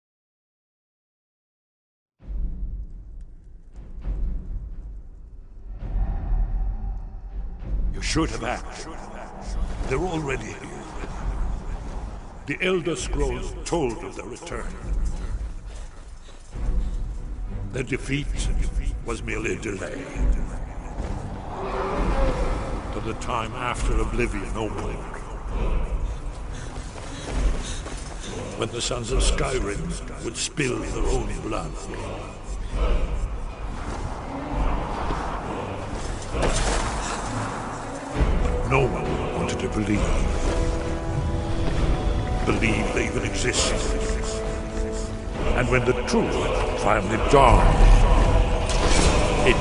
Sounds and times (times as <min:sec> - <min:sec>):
Music: 0:02.2 - 0:49.6
Speech: 0:08.0 - 0:11.4, 0:12.5 - 0:15.0, 0:17.7 - 0:20.9, 0:22.9 - 0:26.0, 0:28.2 - 0:33.2, 0:38.5 - 0:40.4, 0:42.4 - 0:44.5, 0:45.4 - 0:48.4, 0:49.2 - 0:49.6.